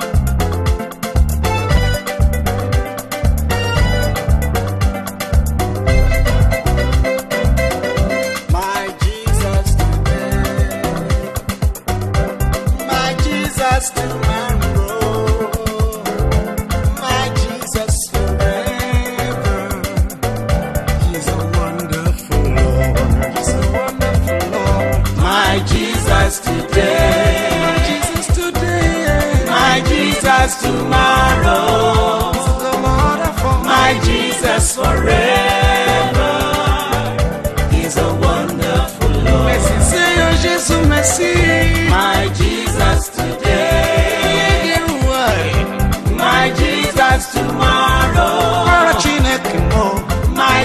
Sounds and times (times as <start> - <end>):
Christmas music: 0.0 - 50.6.